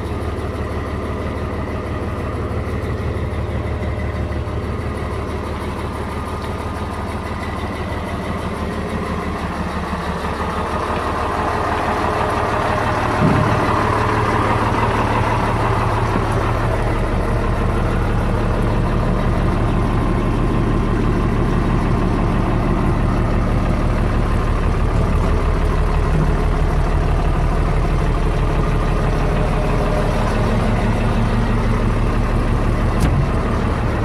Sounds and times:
Truck: 0:00.0 - 0:34.0.

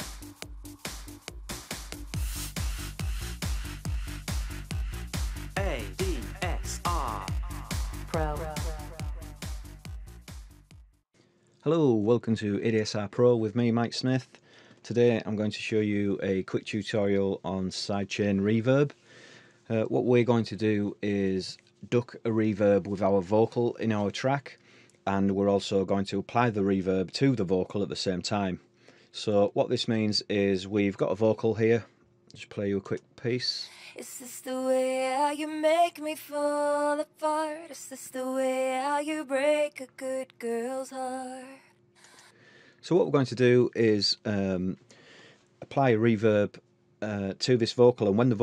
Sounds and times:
Speech: 0:05.6 - 0:07.5, 0:08.1 - 0:09.1, 0:11.6 - 0:19.0, 0:19.7 - 0:28.6, 0:29.2 - 0:34.4, 0:42.8 - 0:44.8, 0:45.6 - 0:48.4.

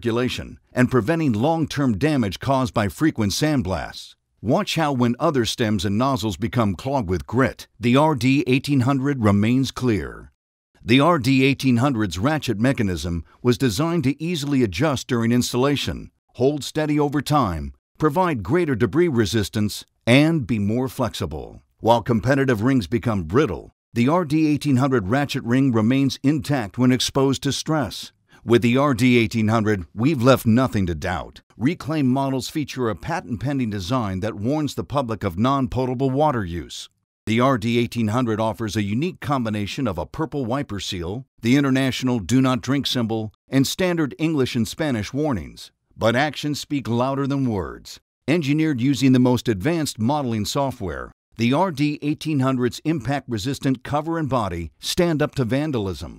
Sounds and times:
Speech: 0:00.0 - 0:56.1.

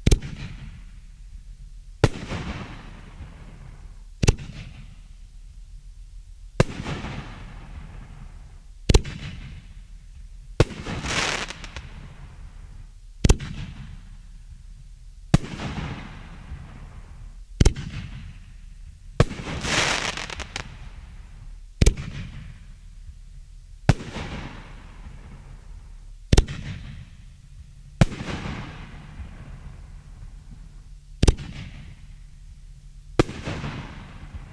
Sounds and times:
Fireworks: 0:00.0 - 0:05.3, 0:06.6 - 0:32.6, 0:33.2 - 0:34.5.

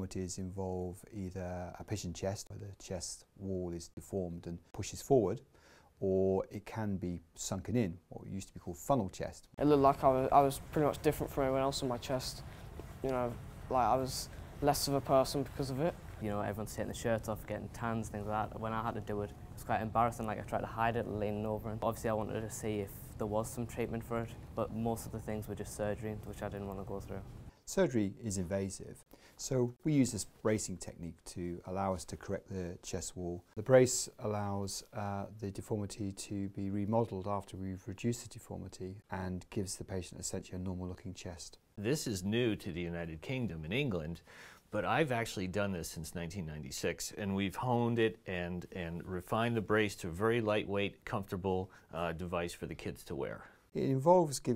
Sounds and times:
Speech: 0:00.0 - 0:54.5.

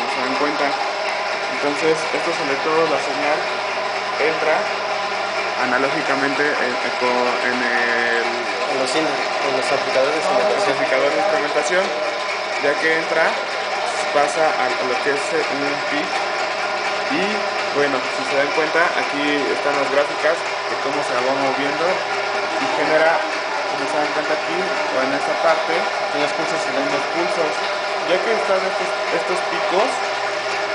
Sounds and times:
Speech: 0:00.0 - 0:00.8, 0:01.5 - 0:03.5, 0:04.2 - 0:04.7, 0:05.6 - 0:12.0, 0:12.6 - 0:16.2, 0:17.1 - 0:22.0, 0:22.6 - 0:30.0.

